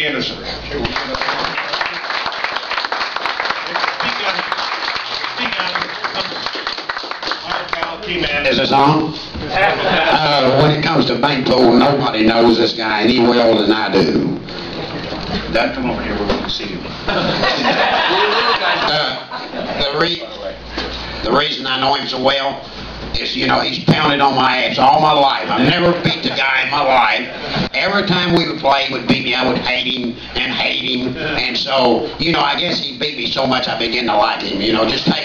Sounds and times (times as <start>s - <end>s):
Male speech, man speaking: 0.0s - 1.3s, 4.0s - 4.6s, 5.4s - 6.3s, 7.4s - 14.4s, 15.5s - 16.9s, 18.8s - 20.6s, 21.2s - 22.6s, 23.2s - 35.2s
Conversation: 0.0s - 35.2s
Narration, monologue: 7.4s - 14.6s, 18.6s - 35.2s.